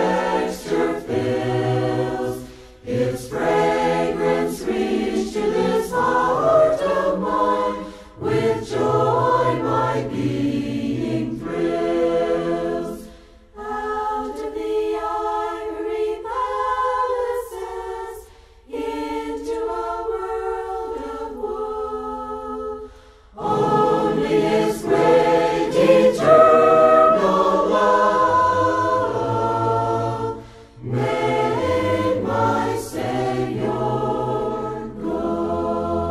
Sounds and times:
A capella: 0.0s - 36.1s.

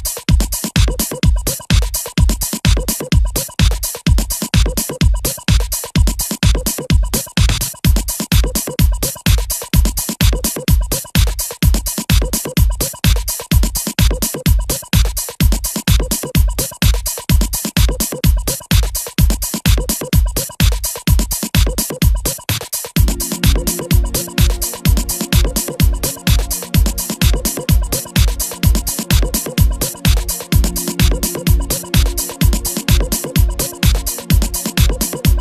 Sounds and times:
Music: 0.0s - 35.4s.

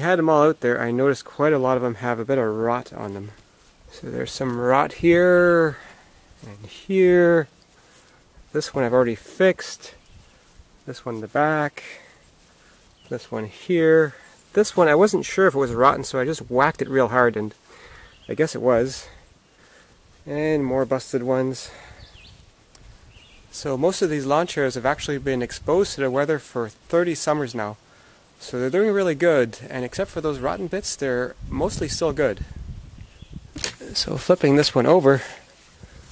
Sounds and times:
Speech: 0.0s - 7.5s, 8.5s - 10.0s, 10.8s - 12.1s, 13.1s - 17.6s, 18.3s - 19.2s, 20.2s - 21.9s, 23.5s - 27.8s, 28.4s - 32.6s, 33.6s - 35.5s.

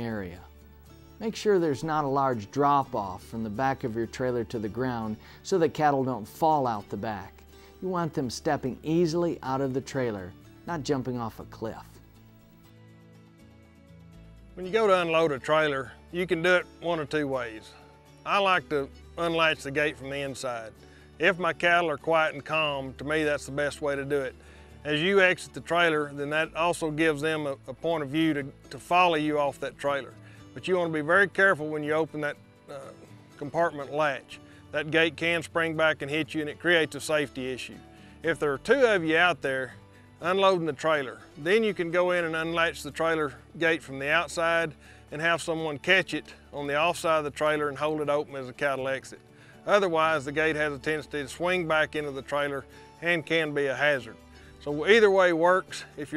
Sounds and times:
Speech: 0.0s - 0.5s, 1.2s - 12.0s, 14.6s - 56.1s
Music: 0.0s - 56.1s.

